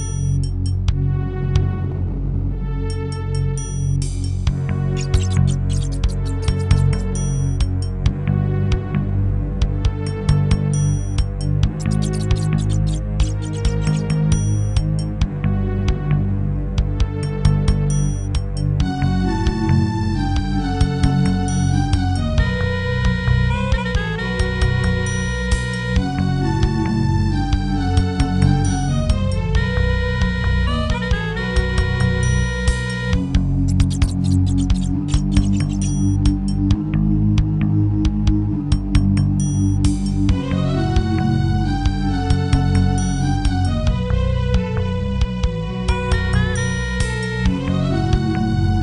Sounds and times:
Video game music: 0:00.0 - 0:48.8.

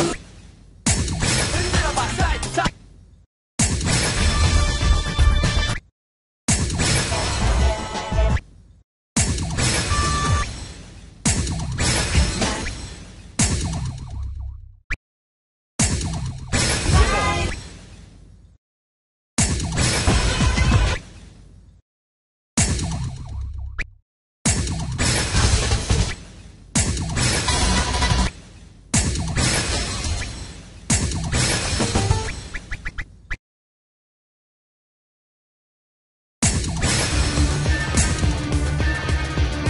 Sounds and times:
Music: 0:01.7 - 0:02.6, 0:04.2 - 0:05.8, 0:07.1 - 0:08.4, 0:37.0 - 0:39.6.

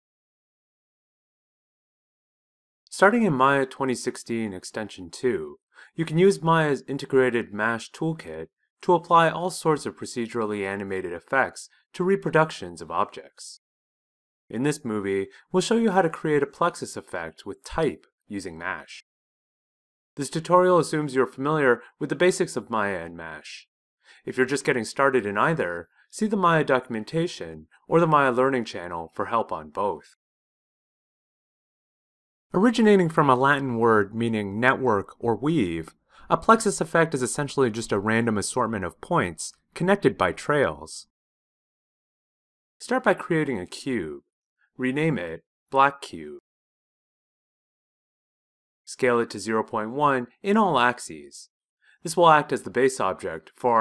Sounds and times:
Speech: 0:02.9 - 0:13.6, 0:14.5 - 0:19.1, 0:20.2 - 0:30.2, 0:32.6 - 0:41.1, 0:42.8 - 0:44.2, 0:44.8 - 0:46.4, 0:48.9 - 0:53.8.

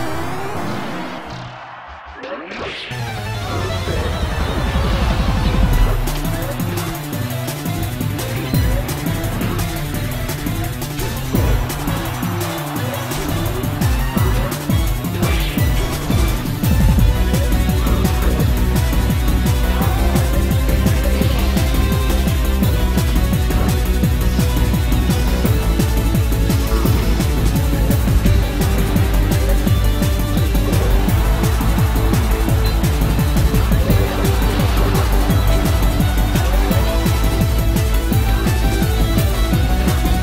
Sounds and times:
Music: 0:00.0 - 0:40.2.

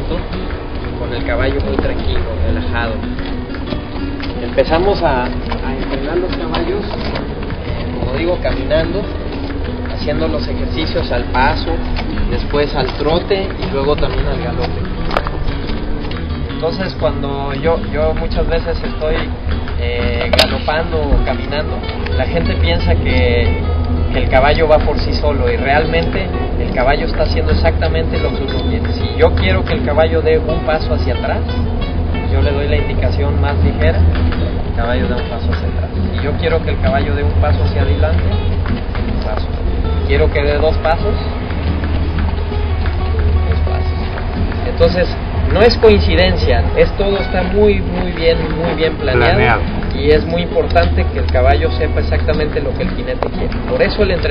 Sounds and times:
Horse: 0:00.0 - 0:54.3
Inside, public space: 0:00.0 - 0:54.3
Music: 0:00.0 - 0:54.3
Speech: 0:01.0 - 0:03.1, 0:04.4 - 0:07.3, 0:07.9 - 0:09.2, 0:09.9 - 0:14.9, 0:16.6 - 0:31.6, 0:32.3 - 0:34.1, 0:34.7 - 0:38.4, 0:39.1 - 0:41.3, 0:43.3 - 0:54.3.

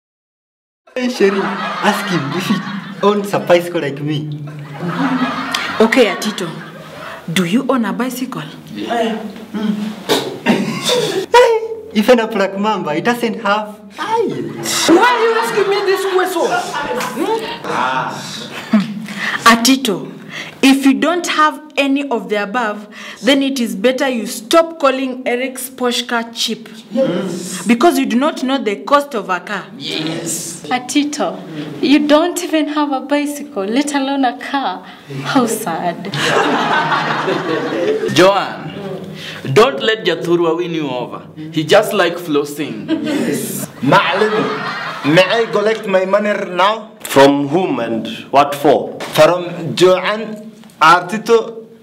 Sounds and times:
Snicker: 0:01.0 - 0:03.2, 0:04.5 - 0:07.2, 0:14.6 - 0:17.7, 0:36.1 - 0:38.1, 0:42.9 - 0:45.6.

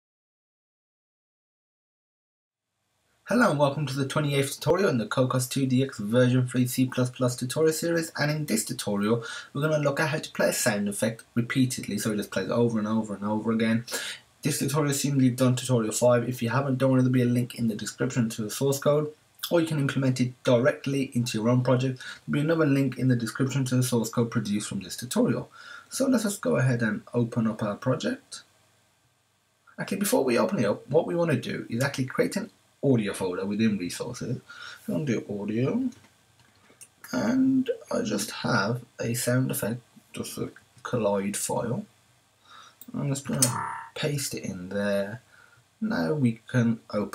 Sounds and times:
Speech: 0:03.3 - 0:28.4, 0:29.7 - 0:36.0, 0:37.0 - 0:41.9, 0:42.8 - 0:45.2, 0:45.8 - 0:47.1.

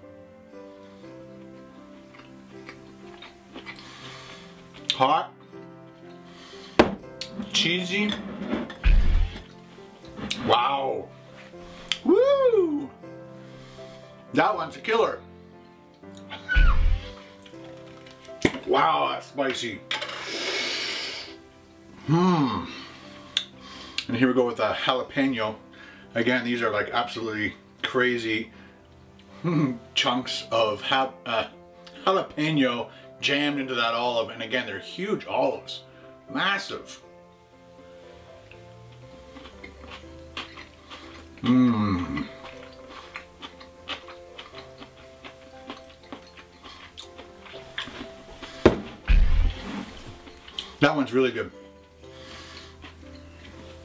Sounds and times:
Music: 0:00.0 - 0:53.8.

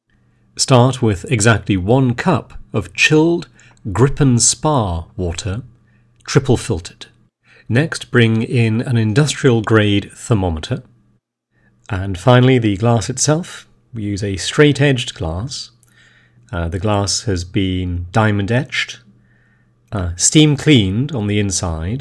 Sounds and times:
Speech: 0:00.6 - 0:11.0, 0:11.8 - 0:15.8, 0:16.5 - 0:19.1, 0:19.9 - 0:22.0.

